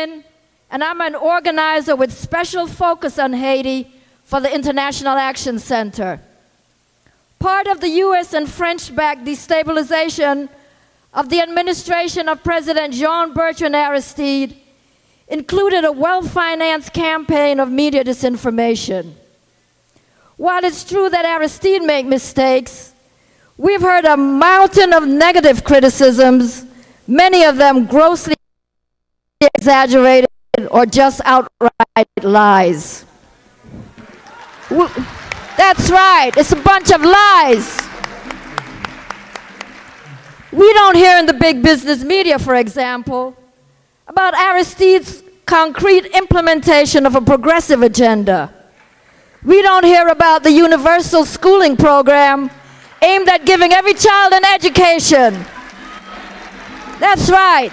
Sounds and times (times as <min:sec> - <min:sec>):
Female speech, woman speaking: 0:00.0 - 0:06.3, 0:07.4 - 0:10.6, 0:11.2 - 0:14.6, 0:15.3 - 0:19.2, 0:20.4 - 0:22.9, 0:23.6 - 0:28.4, 0:29.4 - 0:33.1, 0:34.7 - 0:37.8, 0:40.6 - 0:43.4, 0:44.1 - 0:48.6, 0:49.5 - 0:55.5, 0:57.0 - 0:57.7
Narration, monologue: 0:00.0 - 0:34.1, 0:34.7 - 0:38.4, 0:40.2 - 0:55.6, 0:57.0 - 0:57.7.